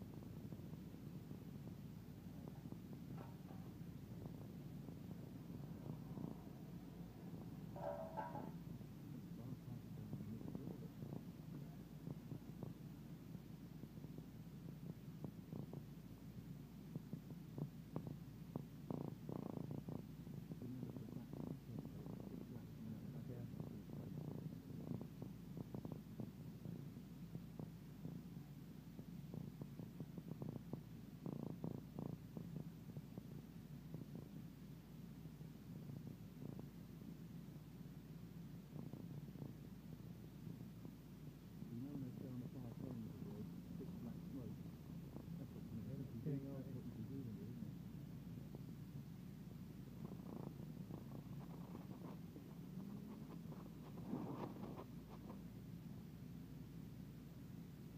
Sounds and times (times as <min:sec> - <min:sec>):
Speech: 0:09.2 - 0:12.0, 0:20.5 - 0:24.4, 0:41.7 - 0:44.7, 0:45.3 - 0:47.8.